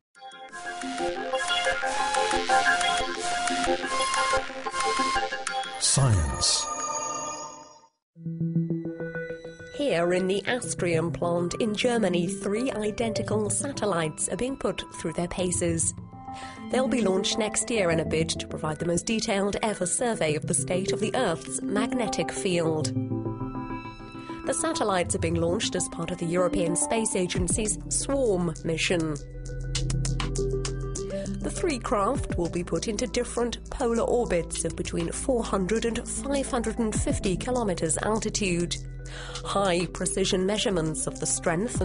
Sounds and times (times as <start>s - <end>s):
Music: 0.2s - 41.8s
Speech: 5.8s - 6.7s, 9.8s - 15.9s, 16.7s - 22.9s, 24.5s - 29.2s, 31.4s - 38.8s, 39.5s - 41.8s.